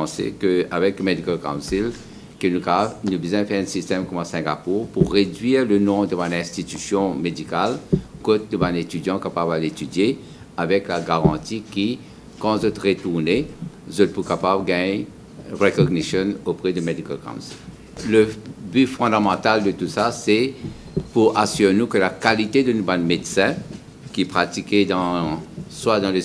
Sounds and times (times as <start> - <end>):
Speech: 0.0 - 26.2.